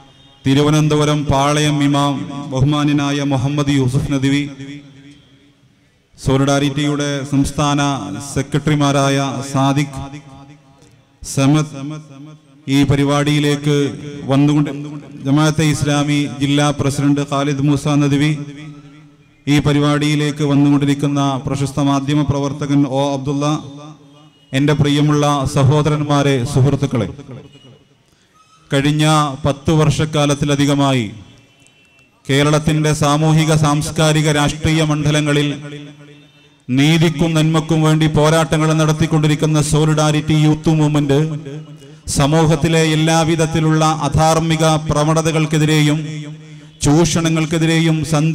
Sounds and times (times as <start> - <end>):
Narration, monologue: 0.0 - 48.3
Male speech, man speaking: 0.4 - 4.8, 6.2 - 10.3, 11.2 - 12.0, 12.7 - 18.8, 19.5 - 23.9, 24.6 - 27.5, 28.7 - 31.3, 32.3 - 35.9, 36.7 - 48.3.